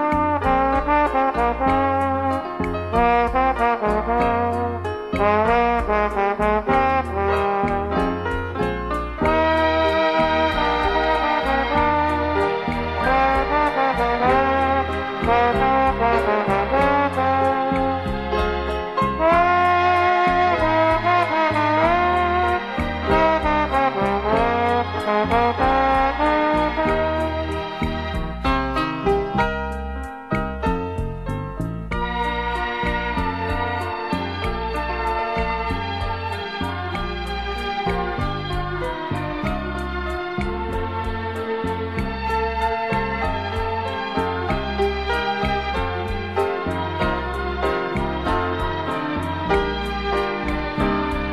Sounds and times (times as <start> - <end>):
Music: 0.0 - 51.3.